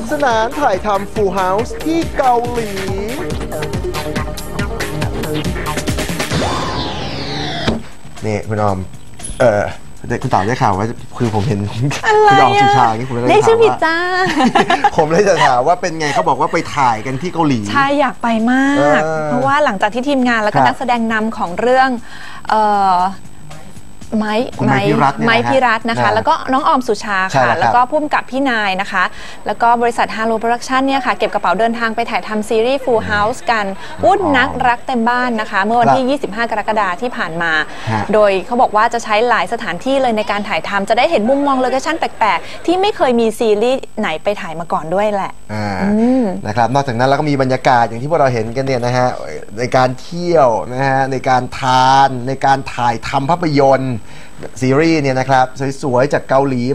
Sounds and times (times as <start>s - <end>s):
Speech: 8.2s - 14.0s, 15.0s - 19.6s, 24.2s - 27.8s, 32.6s - 36.4s, 37.9s - 43.9s, 45.5s - 56.7s.